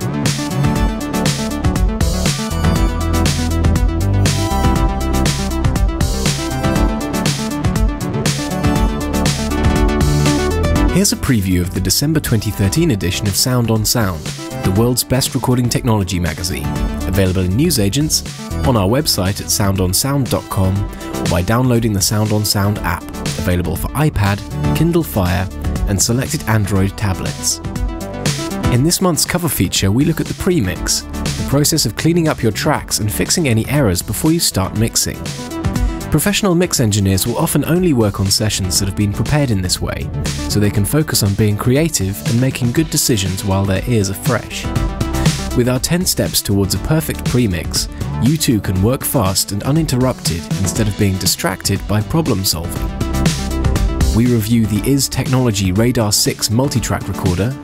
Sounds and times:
Music: 0:00.0 - 0:57.6
Speech: 0:10.9 - 0:27.6, 0:28.7 - 0:35.3, 0:36.1 - 0:44.7, 0:45.5 - 0:52.8, 0:54.1 - 0:57.6.

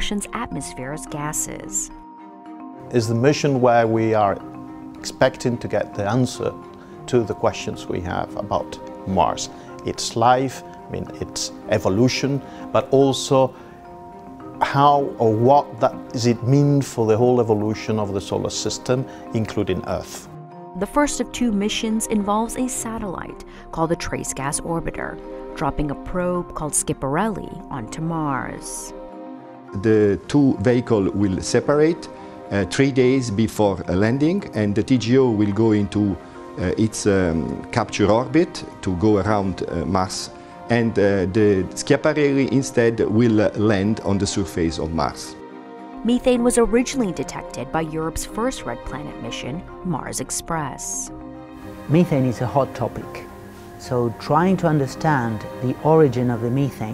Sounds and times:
Music: 0:00.0 - 0:56.9.

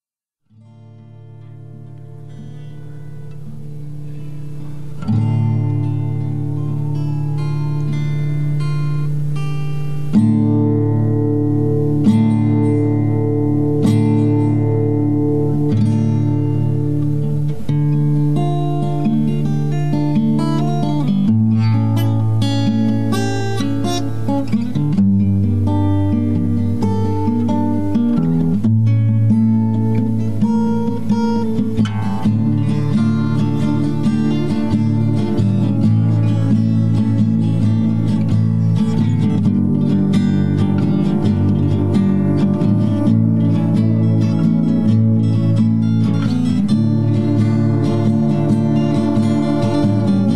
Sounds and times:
Music: 0:00.4 - 0:50.3.

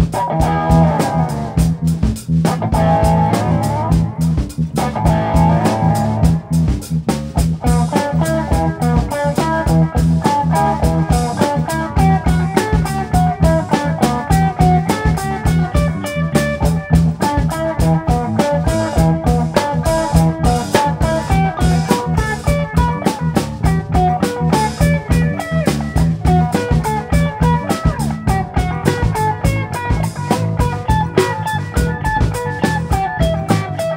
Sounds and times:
Blues: 0:00.0 - 0:33.9.

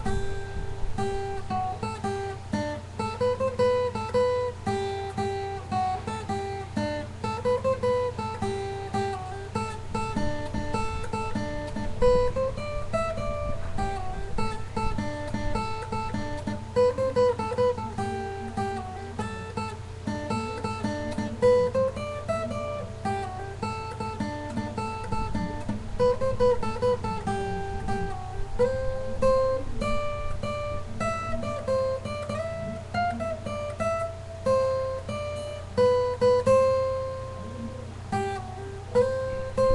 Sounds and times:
Acoustic guitar: 0:00.0 - 0:39.7
Strum: 0:00.0 - 0:39.7.

